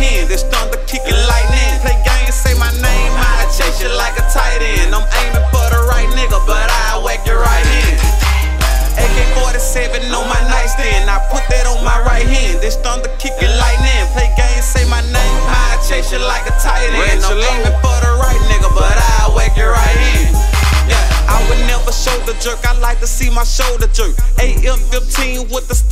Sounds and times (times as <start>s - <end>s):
Music: 0.0s - 25.9s.